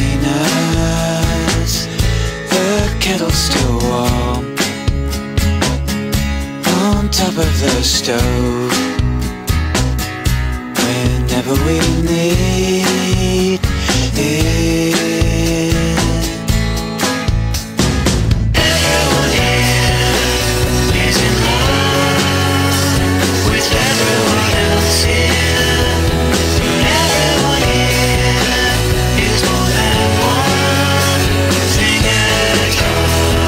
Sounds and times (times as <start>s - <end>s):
Music: 0.0s - 33.4s.